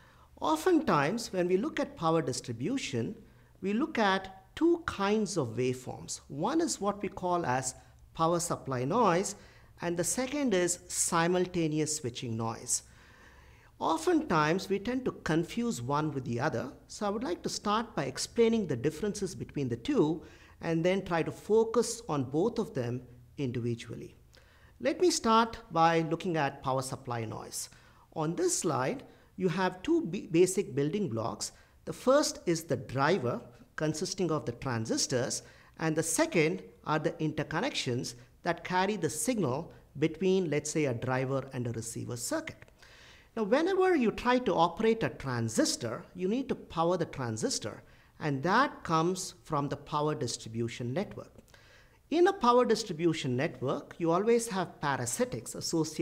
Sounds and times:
Speech: 0.4 - 12.9, 13.8 - 24.2, 24.8 - 42.7, 43.4 - 51.4, 52.1 - 56.0.

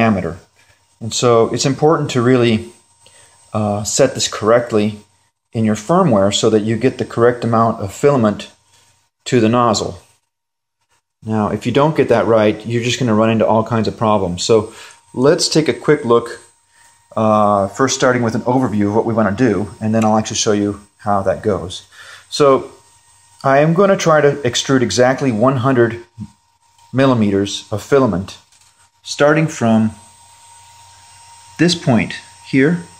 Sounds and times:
Speech: 0.0 - 2.8, 3.5 - 8.6, 9.2 - 10.1, 11.2 - 16.5, 17.1 - 22.8, 23.4 - 30.0, 31.6 - 33.0.

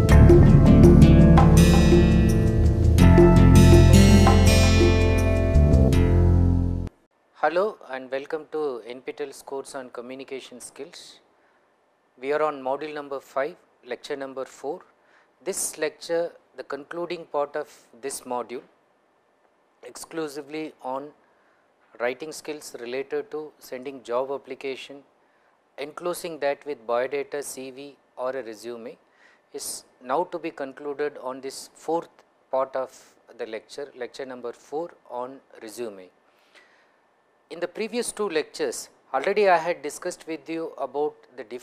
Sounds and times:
Speech: 7.4 - 11.3, 12.2 - 18.7, 19.8 - 21.2, 22.0 - 25.1, 25.8 - 36.2, 37.5 - 41.6.

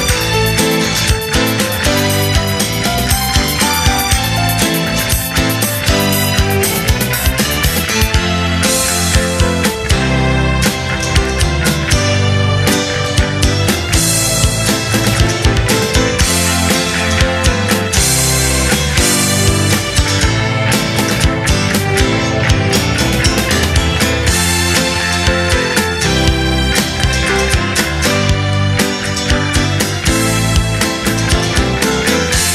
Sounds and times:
Music: 0.0 - 32.5.

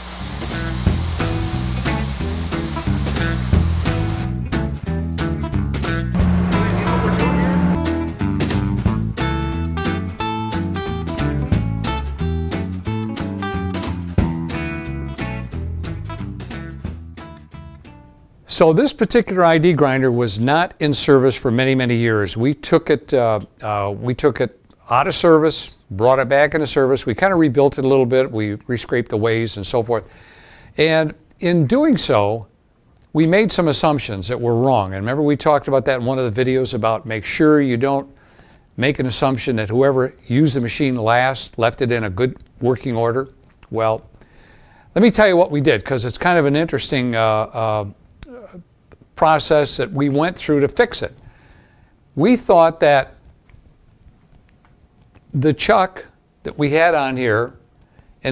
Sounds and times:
Speech: 6.6 - 7.6, 18.5 - 30.1, 30.8 - 32.5, 33.2 - 38.1, 38.8 - 44.1, 45.0 - 48.6, 49.2 - 51.2, 52.2 - 53.2, 55.3 - 57.6.

